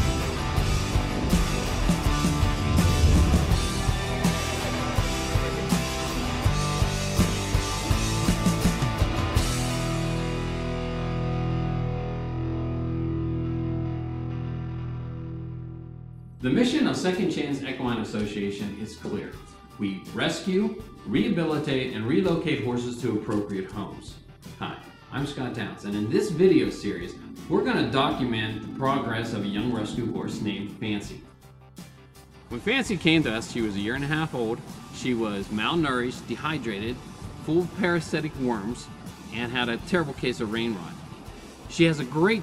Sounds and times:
Music: 0.0s - 42.4s
Speech: 16.4s - 31.3s, 32.5s - 41.0s, 41.7s - 42.4s.

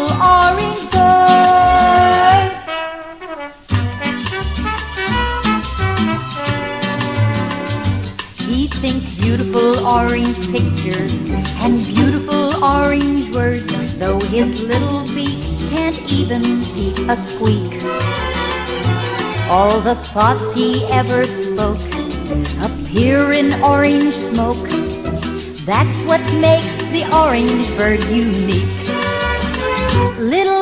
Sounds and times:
Music: 0.0s - 30.6s.

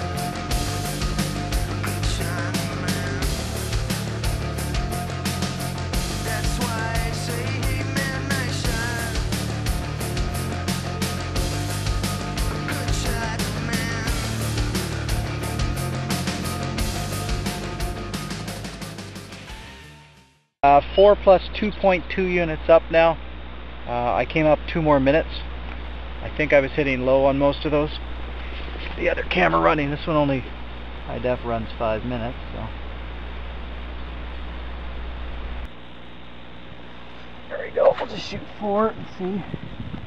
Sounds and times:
Speech: 1.9s - 3.4s, 12.7s - 14.2s, 20.6s - 23.2s, 23.9s - 25.5s, 26.2s - 28.0s, 28.8s - 30.5s, 31.1s - 32.8s, 37.5s - 39.6s.

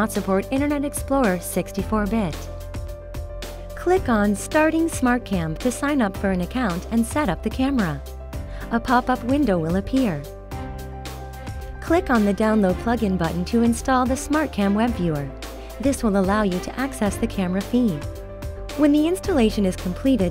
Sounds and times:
Speech: 0.0s - 2.5s, 3.8s - 8.0s, 8.7s - 10.3s, 11.8s - 18.1s, 18.8s - 20.3s
Music: 0.0s - 20.3s.

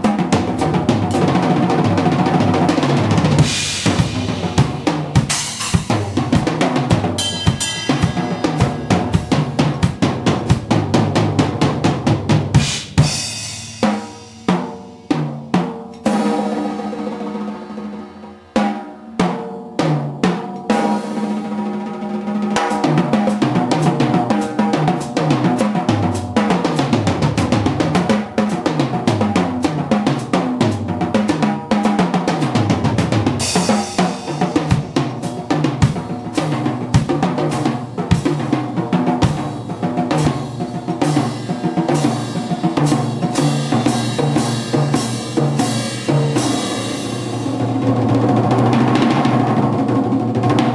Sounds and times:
Bass drum: 0.0s - 15.6s, 22.8s - 50.7s
Drum kit: 0.0s - 50.7s.

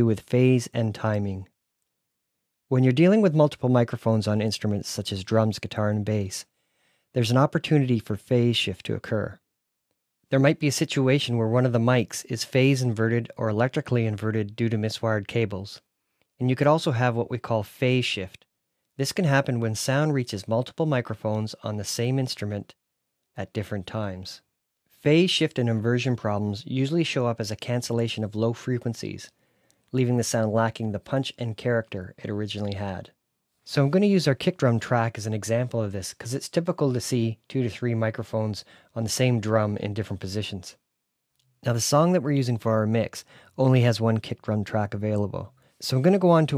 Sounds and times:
Speech: 0.0s - 1.5s, 2.7s - 6.5s, 7.1s - 9.4s, 10.3s - 22.8s, 23.4s - 40.8s, 41.6s - 46.5s.

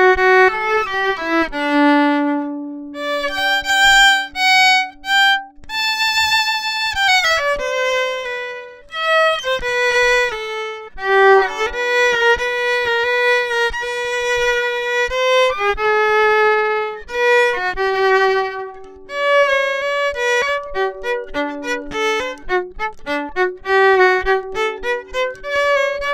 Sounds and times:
Violin, fiddle: 0.0s - 26.1s.

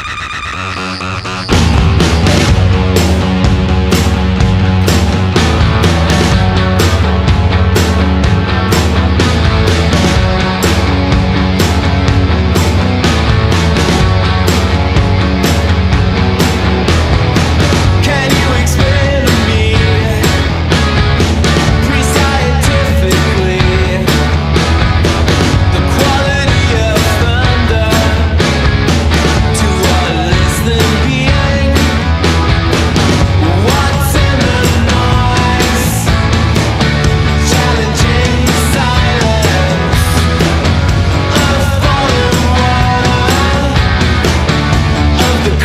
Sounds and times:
Music: 0.0s - 45.6s.

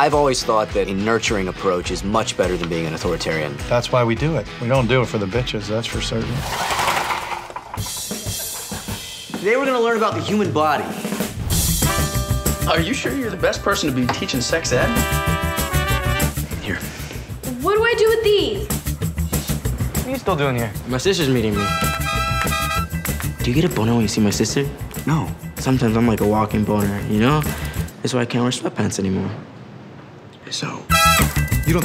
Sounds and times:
Speech: 0.0s - 6.4s, 9.4s - 11.0s
Music: 0.0s - 28.0s, 30.9s - 31.8s.

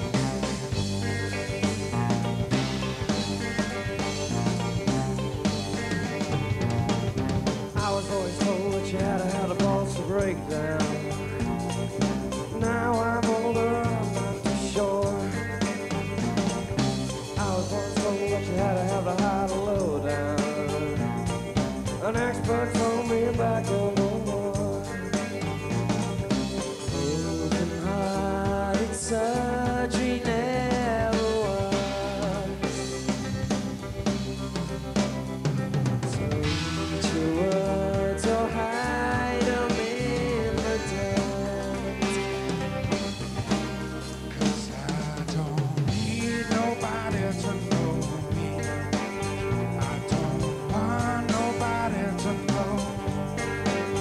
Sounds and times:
Music: 0.0s - 54.0s.

